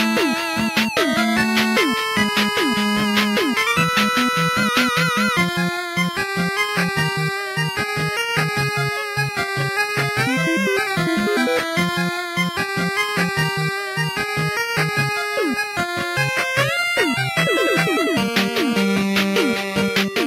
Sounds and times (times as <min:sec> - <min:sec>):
Funny music: 0:00.0 - 0:08.9, 0:09.7 - 0:20.2.